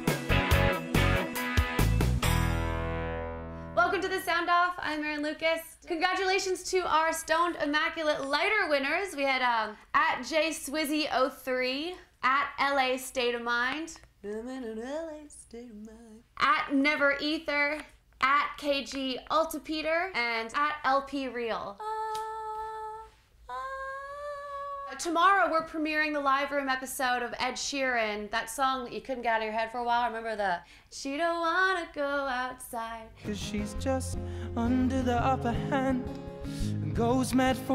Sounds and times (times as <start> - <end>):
Speech: 24.7 - 33.1.